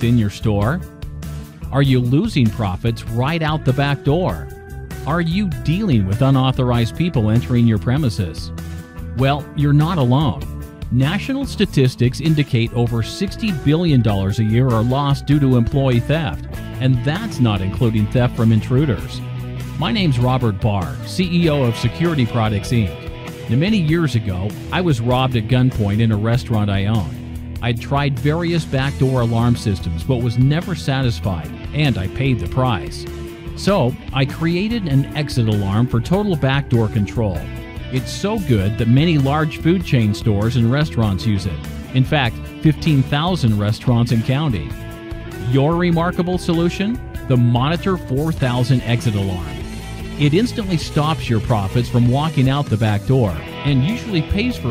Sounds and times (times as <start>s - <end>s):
Speech: 0.0s - 0.9s, 1.7s - 8.5s, 9.2s - 19.2s, 19.8s - 44.8s, 45.4s - 49.6s, 50.2s - 54.7s
Music: 0.0s - 54.7s.